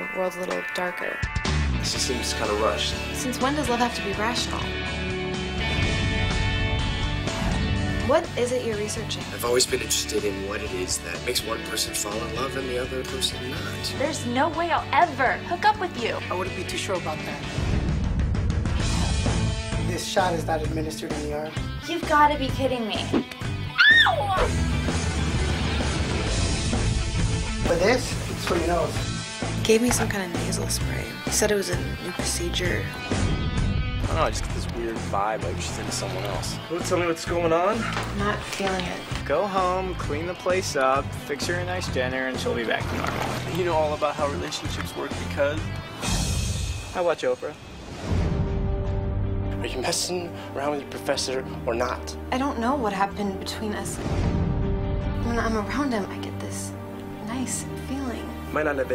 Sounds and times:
Music: 0.0 - 58.9.

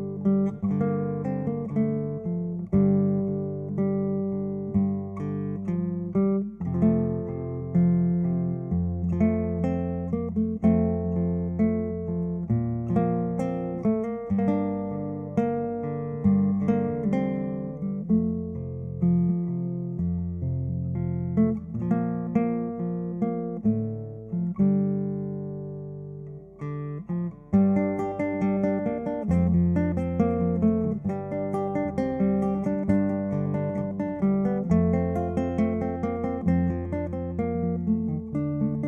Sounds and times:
Strum: 0.0 - 38.8.

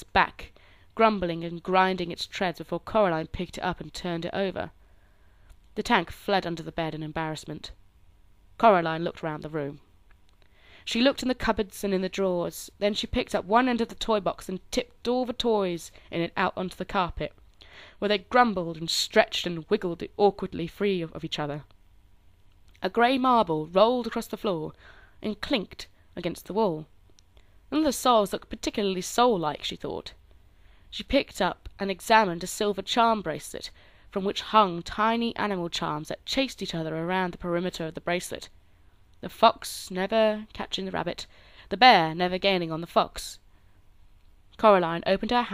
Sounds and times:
Speech: 0.0 - 4.7, 5.8 - 7.8, 8.6 - 9.8, 10.9 - 17.4, 18.0 - 21.7, 22.8 - 26.9, 27.7 - 30.2, 30.9 - 38.5, 39.2 - 43.4, 44.6 - 45.5.

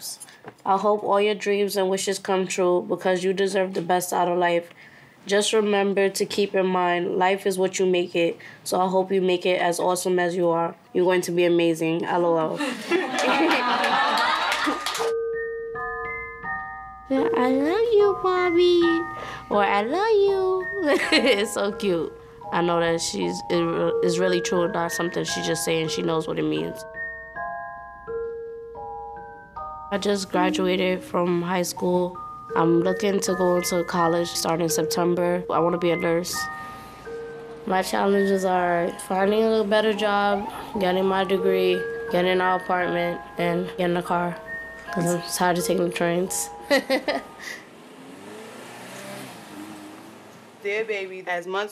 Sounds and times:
Glockenspiel: 13.3 - 47.7
Marimba, xylophone: 13.3 - 47.8.

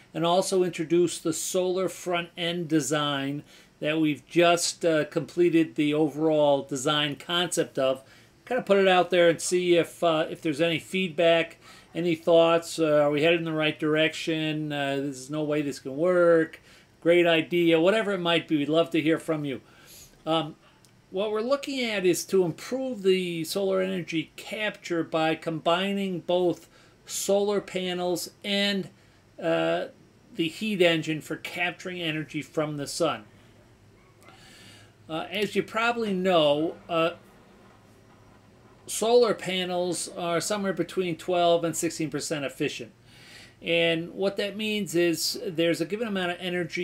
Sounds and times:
Speech: 0.1 - 19.6, 20.2 - 33.3, 35.1 - 37.2, 38.9 - 43.0, 43.6 - 46.8.

